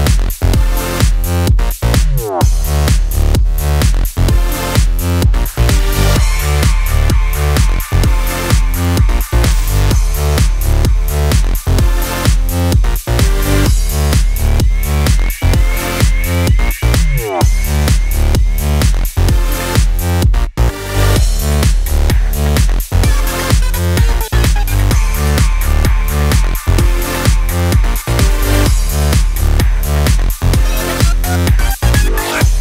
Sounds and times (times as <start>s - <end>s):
Music: 0.0s - 32.6s.